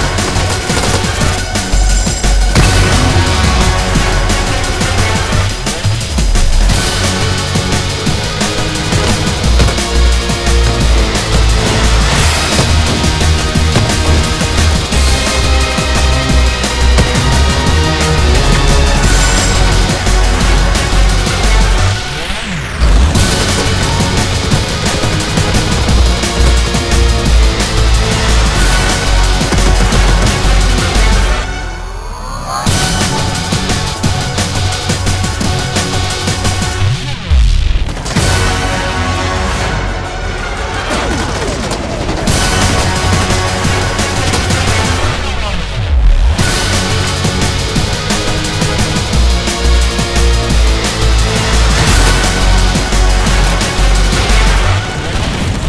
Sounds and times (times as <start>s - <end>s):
Music: 0.0s - 55.6s.